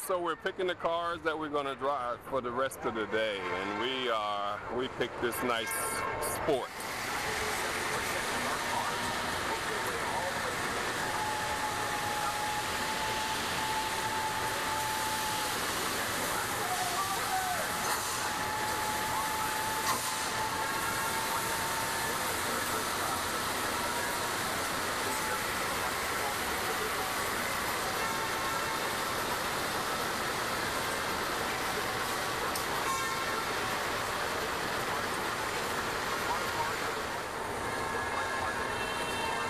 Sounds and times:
Speech: 0.0s - 30.4s
Vehicle: 0.0s - 39.5s
Inside, large room or hall: 6.8s - 37.0s.

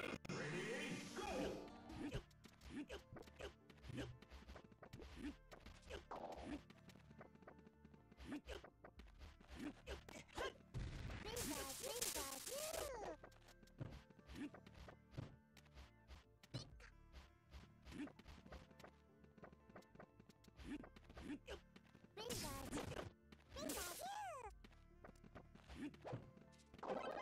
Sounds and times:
Speech: 11.2s - 13.2s, 22.2s - 23.0s, 23.6s - 24.6s.

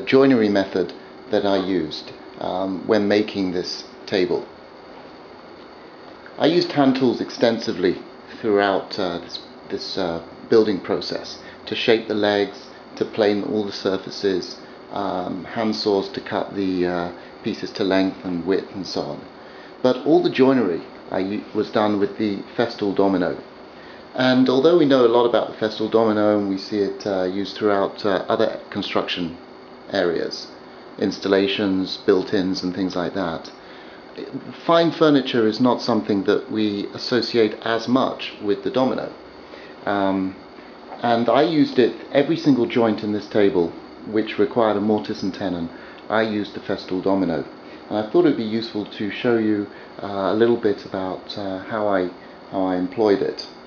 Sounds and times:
Speech: 0.0s - 4.6s, 6.4s - 23.5s, 24.1s - 33.6s, 34.2s - 39.2s, 39.8s - 40.4s, 41.0s - 53.6s.

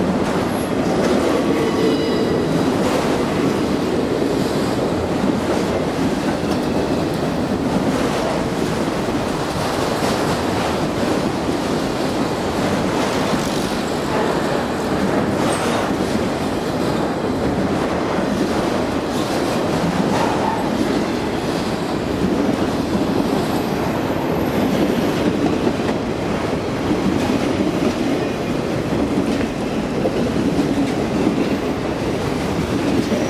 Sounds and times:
Railroad car, train wagon: 0.0s - 33.3s
Train: 0.0s - 33.3s.

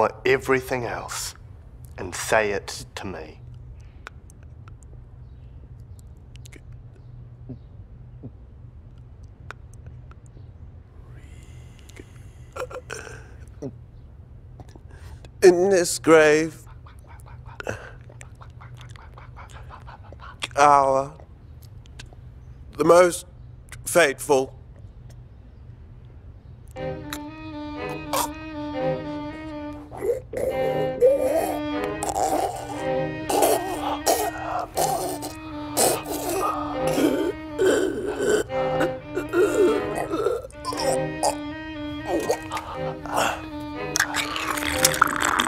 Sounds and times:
Male speech, man speaking: 0.0s - 1.4s, 2.0s - 3.4s, 15.4s - 16.6s, 20.5s - 21.2s, 22.8s - 24.6s
Music: 26.7s - 45.4s.

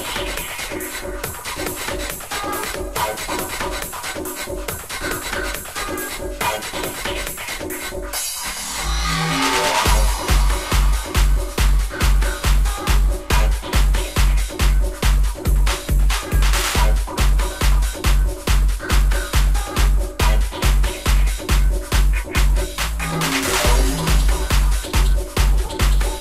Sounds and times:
Music: 0.0s - 26.2s.

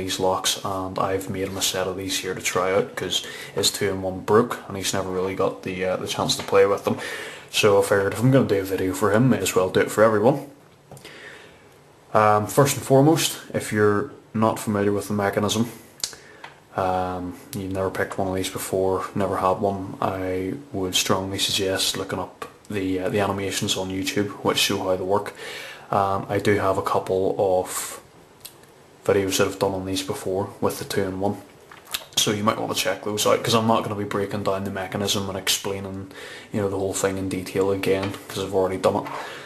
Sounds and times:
Speech: 0.0s - 10.6s, 12.1s - 15.9s, 16.7s - 28.1s, 29.0s - 39.2s.

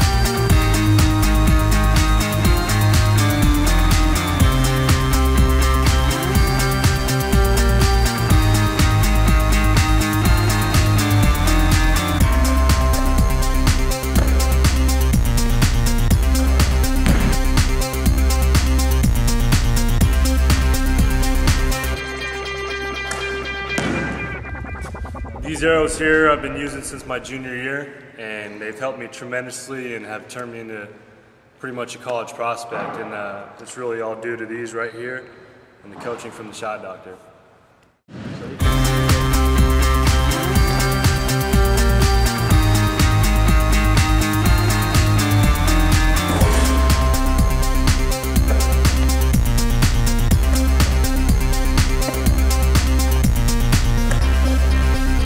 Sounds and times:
Speech: 25.5s - 31.0s, 31.6s - 37.3s.

